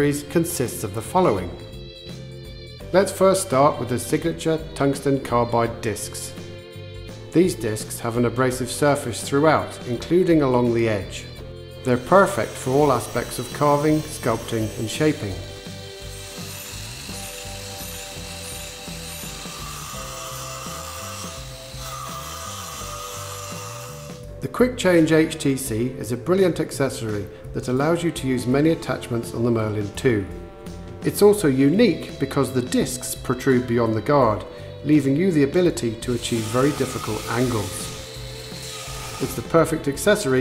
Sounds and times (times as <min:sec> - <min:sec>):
Speech: 0:00.0 - 0:01.6, 0:02.9 - 0:06.4, 0:07.4 - 0:15.5, 0:24.4 - 0:30.4, 0:31.0 - 0:38.0, 0:39.2 - 0:40.4
Music: 0:00.0 - 0:40.4.